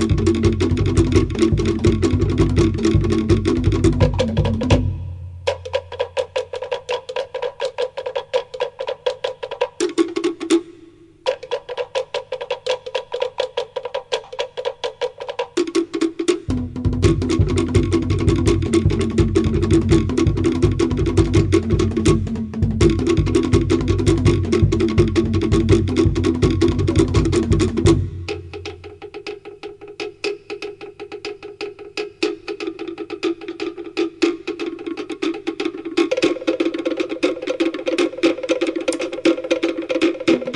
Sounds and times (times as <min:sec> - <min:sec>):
Drum: 0:00.0 - 0:40.5
Wood block: 0:00.0 - 0:40.5.